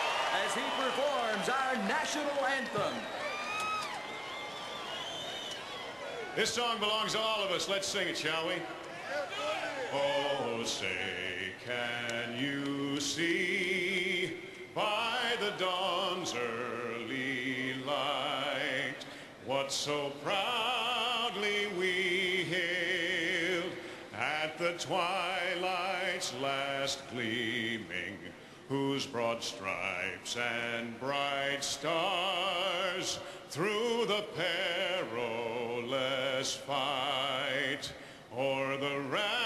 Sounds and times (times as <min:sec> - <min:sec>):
Male singing: 0:09.9 - 0:39.4.